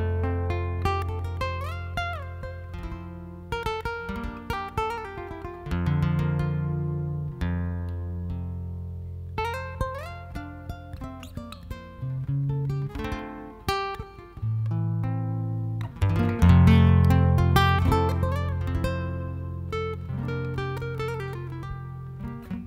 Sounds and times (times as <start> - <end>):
Acoustic guitar: 0.0 - 22.6.